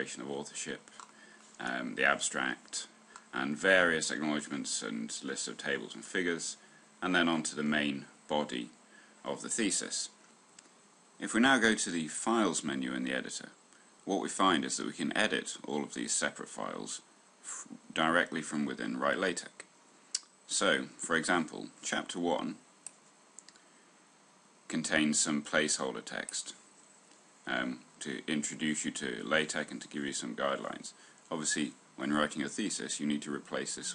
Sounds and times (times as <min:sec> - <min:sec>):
Speech: 0:00.0 - 0:00.9, 0:01.6 - 0:10.2, 0:11.2 - 0:22.6, 0:24.7 - 0:26.6, 0:27.4 - 0:33.9.